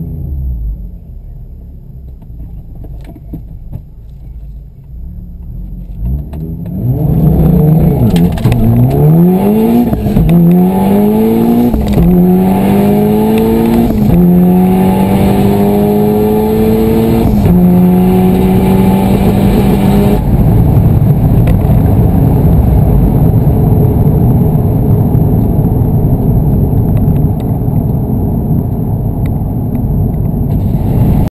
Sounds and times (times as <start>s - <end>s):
Motor vehicle (road): 0.0s - 31.3s.